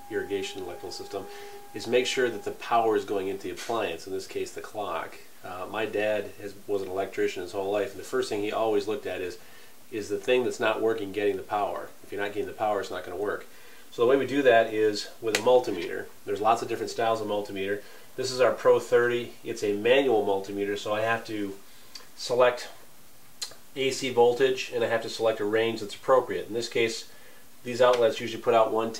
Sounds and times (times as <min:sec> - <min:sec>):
Speech: 0:00.0 - 0:21.6, 0:22.2 - 0:22.8, 0:23.4 - 0:28.9.